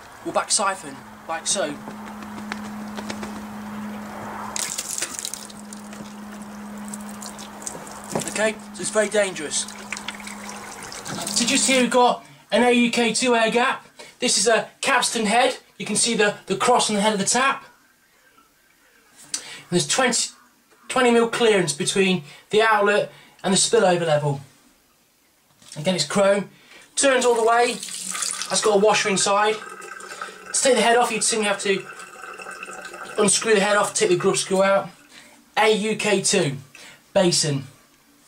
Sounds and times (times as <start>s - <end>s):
Speech: 0.2s - 1.8s, 8.3s - 9.7s, 11.2s - 17.7s, 19.7s - 24.5s, 25.7s - 27.8s, 28.5s - 29.6s, 30.5s - 31.9s, 33.2s - 35.0s, 35.6s - 37.8s
Water: 4.5s - 11.9s, 27.2s - 35.3s
Trickle, dribble: 4.6s - 11.9s, 27.2s - 35.2s.